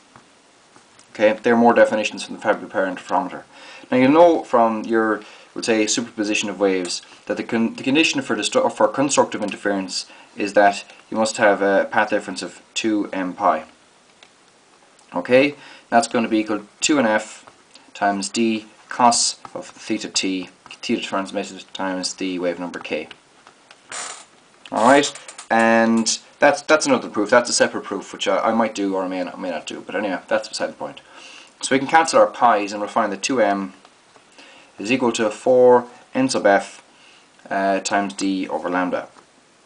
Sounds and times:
Inside, small room: 0.0 - 39.6
Speech: 1.1 - 13.8, 15.1 - 23.2, 24.7 - 33.8, 34.8 - 36.8, 37.4 - 39.2.

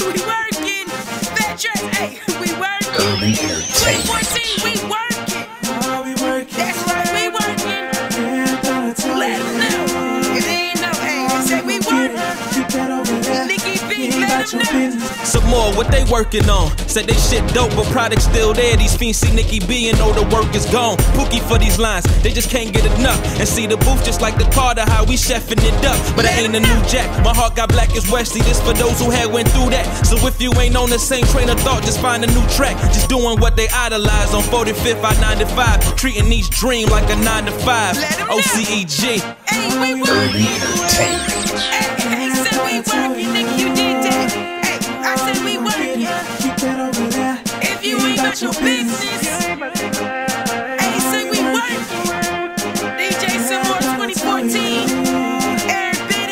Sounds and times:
Dance music: 0.0 - 56.3
Rhythm and blues: 0.0 - 56.3.

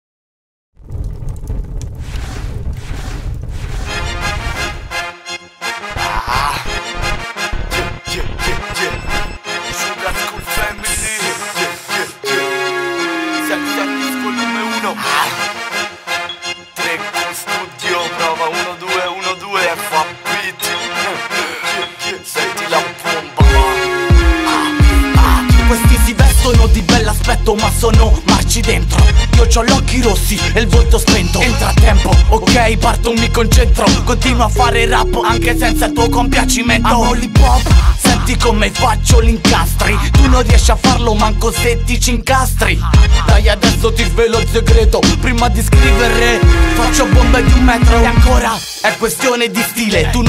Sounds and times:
Music: 3.8 - 50.2
Rapping: 6.0 - 6.8, 7.6 - 12.5, 13.4 - 15.5, 16.8 - 50.2.

